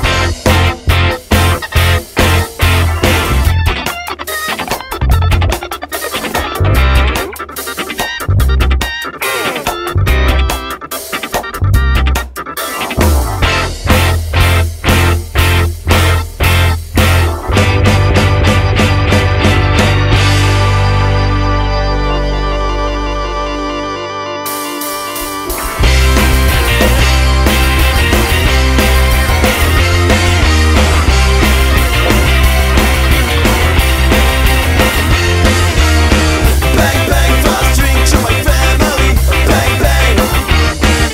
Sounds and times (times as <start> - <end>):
Music: 0.0 - 41.1.